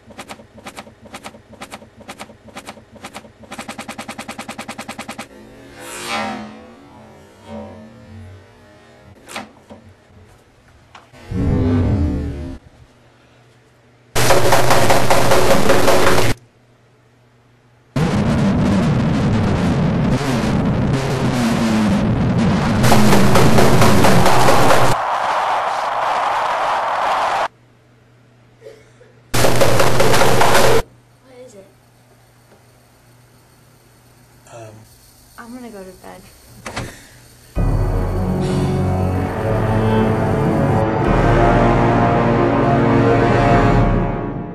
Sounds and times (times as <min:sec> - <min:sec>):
Music: 0:14.2 - 0:16.4, 0:18.0 - 0:25.0, 0:29.4 - 0:30.8, 0:37.6 - 0:44.5
Speech: 0:31.2 - 0:31.8, 0:35.4 - 0:36.3.